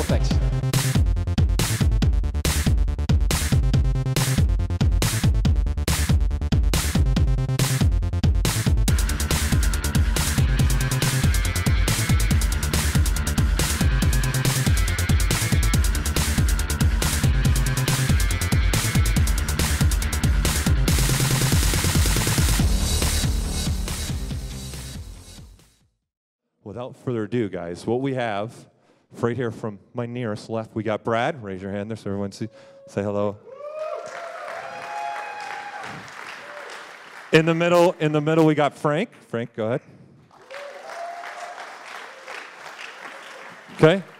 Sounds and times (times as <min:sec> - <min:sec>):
Music: 0:00.0 - 0:26.0.